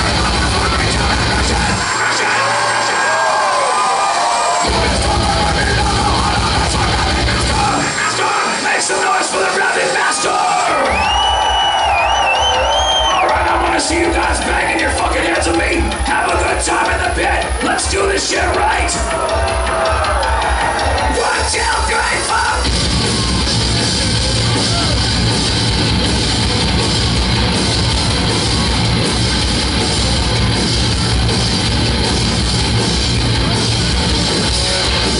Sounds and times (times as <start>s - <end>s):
Music: 0.0s - 35.1s.